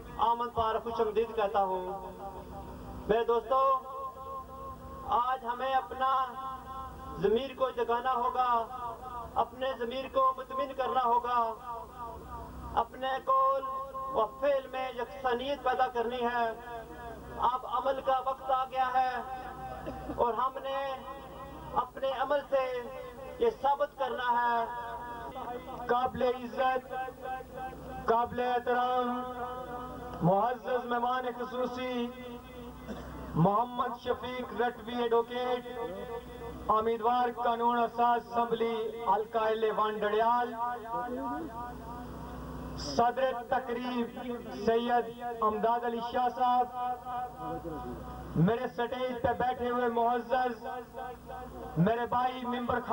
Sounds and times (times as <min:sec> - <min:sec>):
Male speech, man speaking: 0:00.0 - 0:02.2, 0:03.1 - 0:04.0, 0:05.1 - 0:06.5, 0:07.2 - 0:11.8, 0:12.8 - 0:16.8, 0:17.4 - 0:19.5, 0:20.1 - 0:27.4, 0:28.1 - 0:32.7, 0:33.4 - 0:41.7, 0:42.8 - 0:52.9
Narration, monologue: 0:00.0 - 0:52.9.